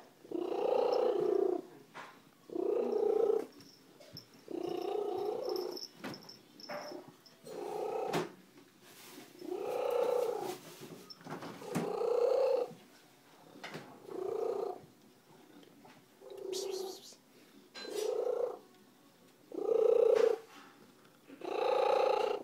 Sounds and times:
Purr: 0:00.2 - 0:05.9, 0:06.6 - 0:08.4, 0:09.0 - 0:10.6, 0:11.5 - 0:12.8, 0:13.4 - 0:17.0, 0:17.9 - 0:18.7, 0:19.5 - 0:22.4.

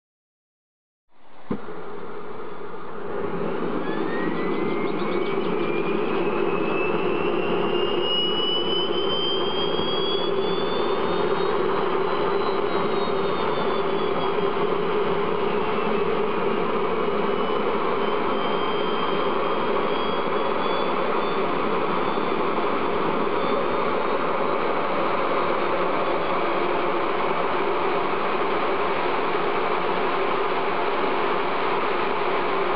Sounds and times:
Engine: 0:01.1 - 0:32.7.

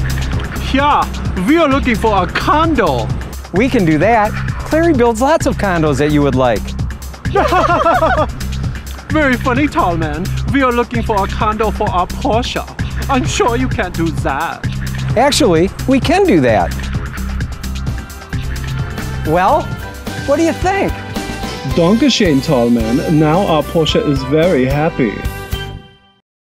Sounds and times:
Music: 0:00.0 - 0:26.2
Speech: 0:00.6 - 0:06.6, 0:09.1 - 0:14.6, 0:15.2 - 0:16.7, 0:21.7 - 0:25.2.

